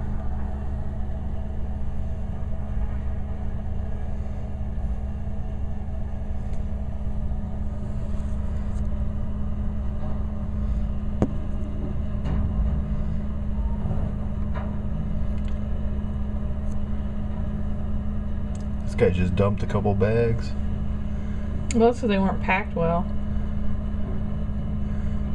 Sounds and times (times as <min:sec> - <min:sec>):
Outside, urban or manmade: 0:00.0 - 0:25.3
Vehicle: 0:00.0 - 0:25.3.